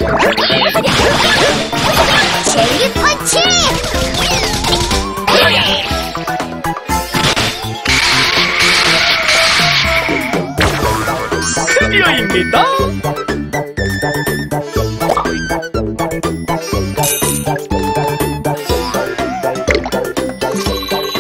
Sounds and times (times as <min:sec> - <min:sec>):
Music: 0:00.0 - 0:21.2
Speech: 0:11.6 - 0:12.9.